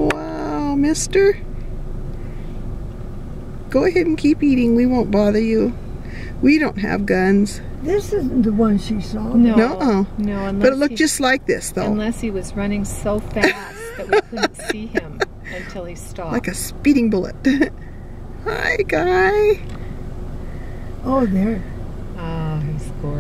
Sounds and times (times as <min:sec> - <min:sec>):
Speech: 0:06.4 - 0:17.3.